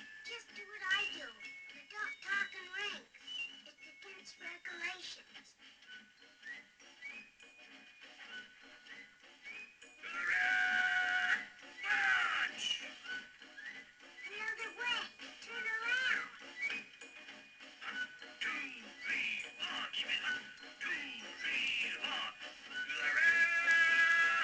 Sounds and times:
Music: 0.0s - 24.4s
Television: 0.0s - 24.4s
Speech: 0.3s - 3.1s, 3.9s - 5.5s, 14.3s - 16.4s, 18.4s - 22.3s.

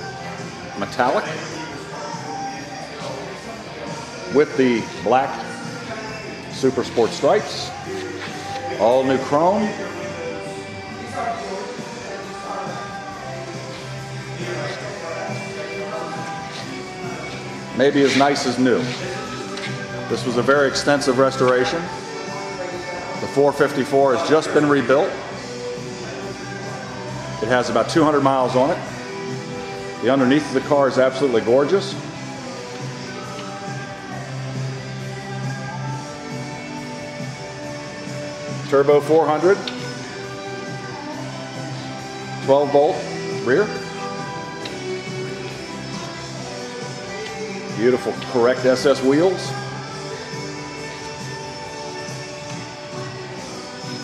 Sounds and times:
Music: 0.0s - 54.0s
Speech: 0.8s - 1.5s, 4.3s - 5.5s, 8.7s - 9.9s, 17.8s - 19.0s, 22.6s - 25.2s, 27.4s - 28.8s, 30.0s - 32.0s, 42.4s - 43.8s, 47.7s - 49.6s.

